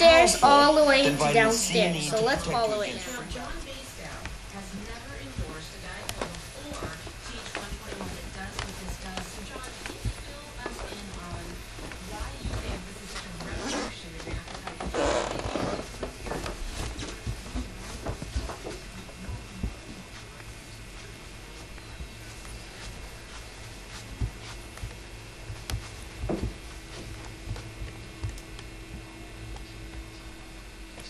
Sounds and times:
Speech: 0.0s - 15.6s, 16.8s - 23.4s.

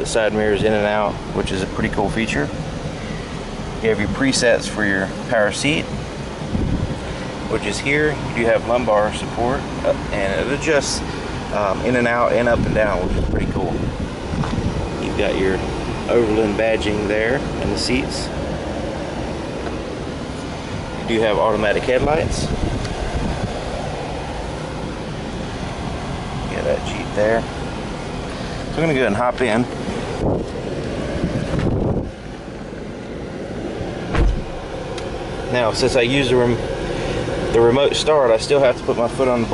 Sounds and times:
Speech: 0.0s - 2.6s, 3.8s - 5.9s, 7.5s - 13.8s, 15.0s - 18.4s, 21.0s - 22.6s, 26.5s - 27.5s, 28.7s - 29.7s, 35.5s - 36.6s, 37.5s - 39.5s
Car: 0.0s - 39.5s
Outside, urban or manmade: 0.0s - 39.5s.

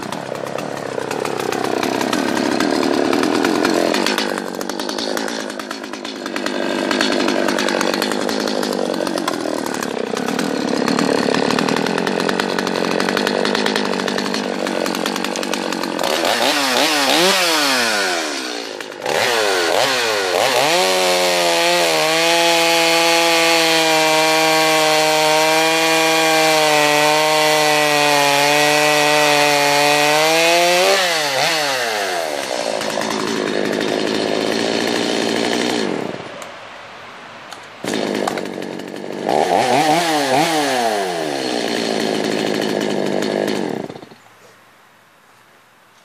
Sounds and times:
Chainsaw: 0.0s - 36.5s, 37.5s - 44.3s.

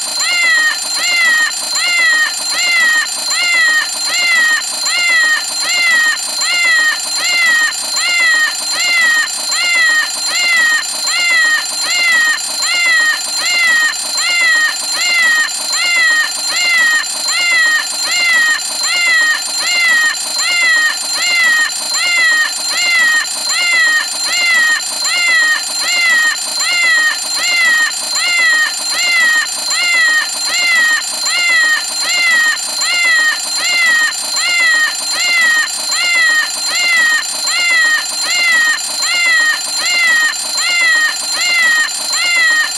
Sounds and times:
Meow: 0.2s - 42.7s.

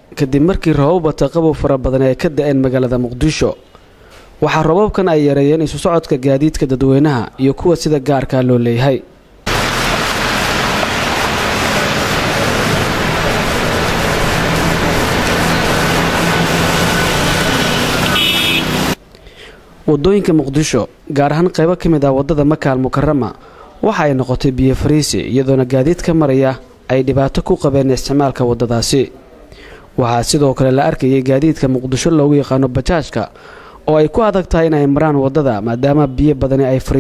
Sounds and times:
Speech: 0.1s - 3.6s, 4.4s - 9.1s, 19.9s - 37.0s.

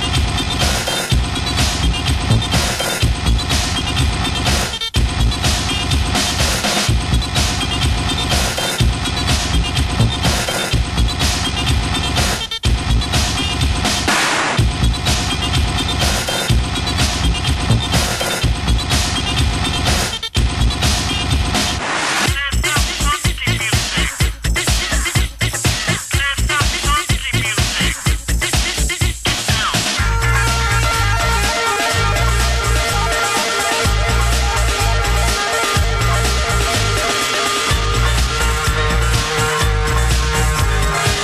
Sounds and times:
Electronic dance music: 0.0s - 41.2s.

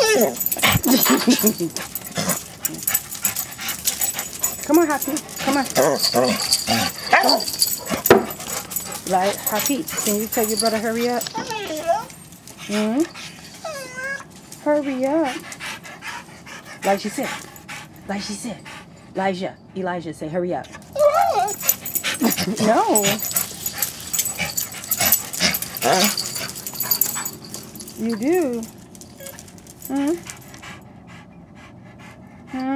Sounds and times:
Whimper (dog): 0.0s - 14.3s, 20.8s - 30.4s
Speech: 4.6s - 6.3s, 9.1s - 11.9s, 14.6s - 15.4s, 16.8s - 17.4s, 18.1s - 20.8s, 22.3s - 23.2s, 28.0s - 28.7s, 29.9s - 30.2s.

